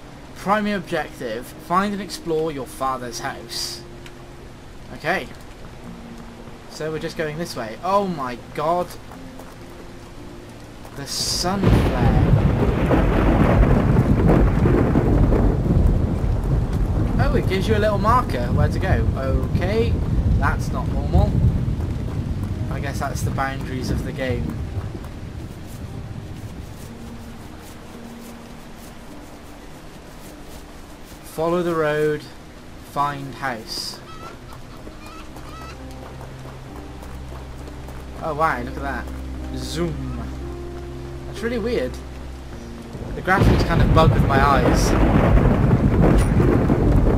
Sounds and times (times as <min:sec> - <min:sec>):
Music: 0:00.0 - 0:47.1
Outside, rural or natural: 0:00.0 - 0:47.1
Speech: 0:04.9 - 0:05.4, 0:11.0 - 0:12.3, 0:17.2 - 0:21.4, 0:22.7 - 0:24.5, 0:31.3 - 0:32.4, 0:33.0 - 0:34.0, 0:38.2 - 0:40.3, 0:43.2 - 0:45.0.